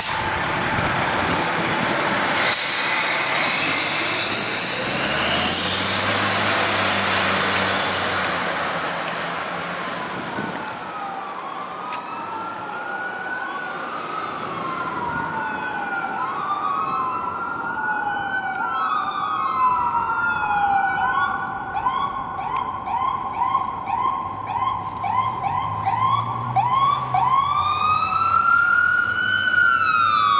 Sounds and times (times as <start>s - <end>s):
Car: 0.0s - 13.6s, 14.2s - 30.4s
Fire engine, fire truck (siren): 0.0s - 30.4s.